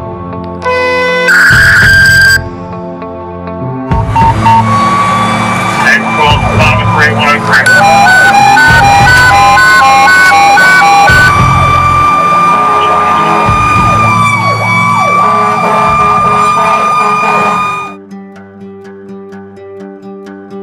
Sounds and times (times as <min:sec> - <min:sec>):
Ambulance (siren): 0:00.7 - 0:02.4, 0:04.0 - 0:18.0
Car alarm: 0:00.7 - 0:02.4, 0:04.1 - 0:18.0
Police car (siren): 0:00.7 - 0:02.4, 0:04.0 - 0:18.0.